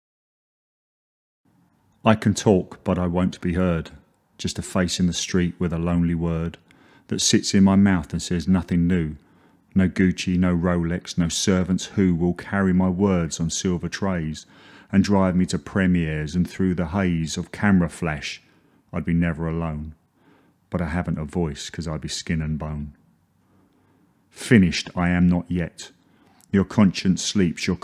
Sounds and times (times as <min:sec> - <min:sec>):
Speech: 0:02.0 - 0:20.0, 0:20.7 - 0:23.0, 0:24.3 - 0:27.8.